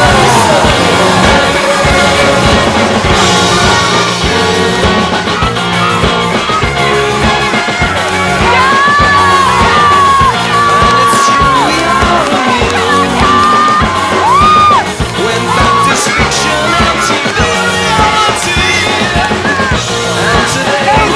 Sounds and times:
Music: 0:00.0 - 0:21.1
Yell: 0:08.4 - 0:19.8.

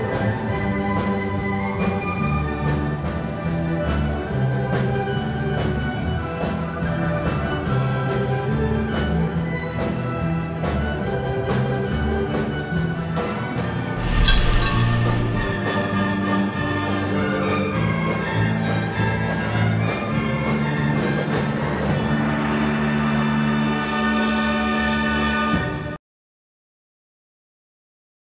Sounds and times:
Orchestra: 0:00.0 - 0:26.0.

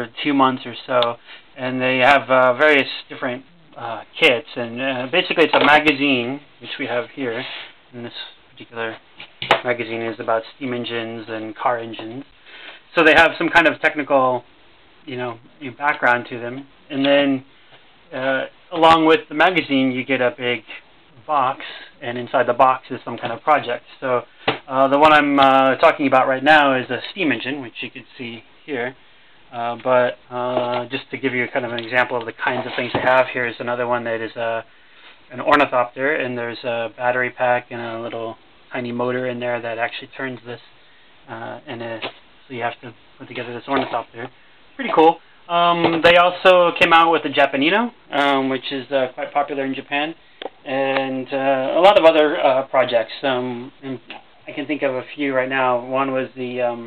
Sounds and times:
Speech: 0:00.0 - 0:12.3, 0:12.9 - 0:17.5, 0:18.1 - 0:34.7, 0:35.3 - 0:56.8.

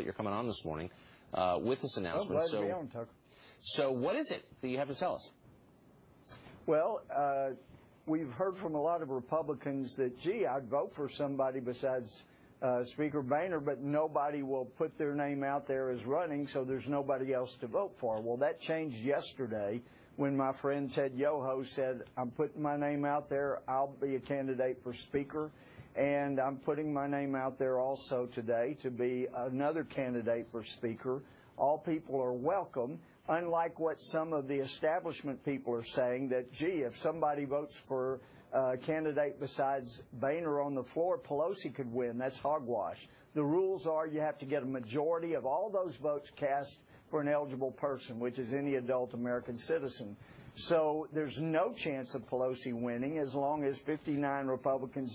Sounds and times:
Speech: 0:00.0 - 0:05.4, 0:06.7 - 0:55.1.

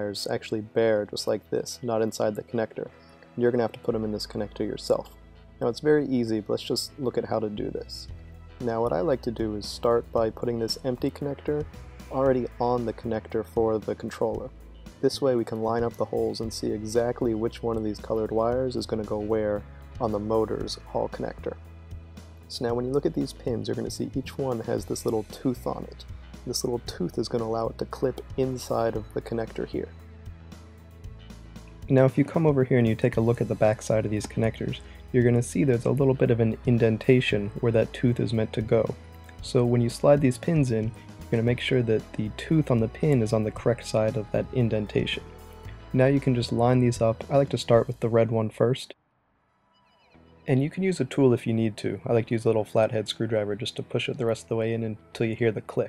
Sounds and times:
Speech: 0:00.0 - 0:21.6, 0:22.5 - 0:30.0, 0:31.9 - 0:45.2, 0:45.9 - 0:49.0, 0:50.5 - 0:55.8
Music: 0:00.0 - 0:55.8.

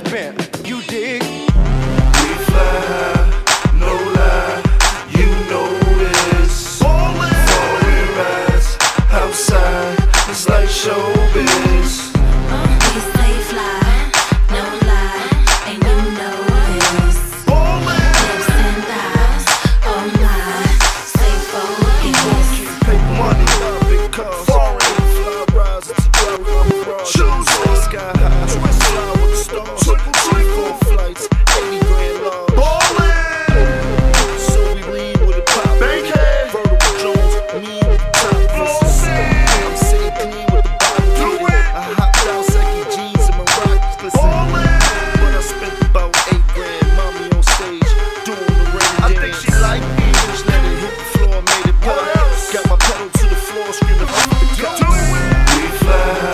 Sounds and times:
Rapping: 0:00.0 - 0:56.3.

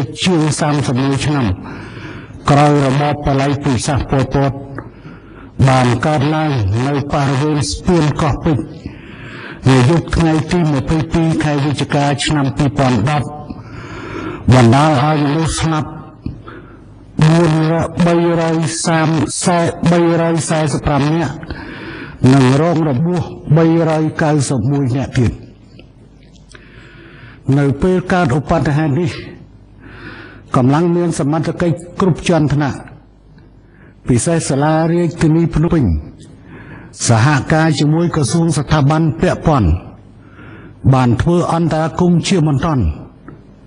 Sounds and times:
Speech: 0:00.0 - 0:01.6, 0:02.4 - 0:04.8, 0:05.6 - 0:08.8, 0:09.6 - 0:13.5, 0:14.5 - 0:16.2, 0:17.2 - 0:21.4, 0:22.2 - 0:25.5, 0:27.5 - 0:29.4, 0:30.5 - 0:33.0, 0:34.0 - 0:36.2, 0:37.0 - 0:40.0, 0:40.8 - 0:43.1.

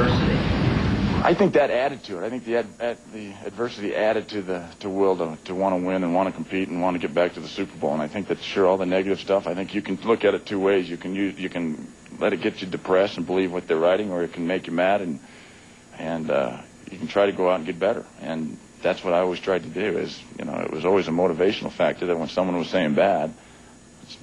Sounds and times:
Male speech, man speaking: 0:00.0 - 0:00.5, 0:01.2 - 0:15.2, 0:16.0 - 0:23.4.

